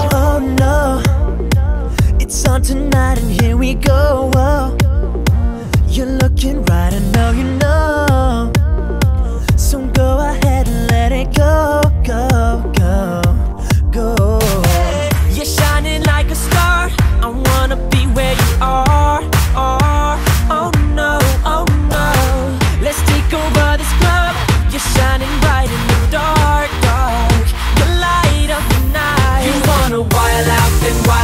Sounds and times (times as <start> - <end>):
Singing: 0.0 - 5.1, 5.9 - 31.2
Music: 0.0 - 31.2.